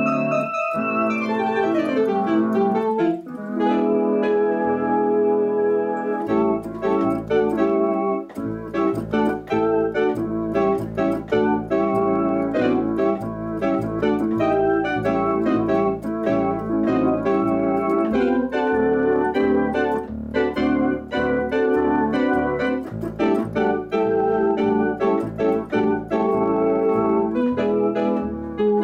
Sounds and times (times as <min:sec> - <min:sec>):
Electronic organ: 0:00.0 - 0:28.8.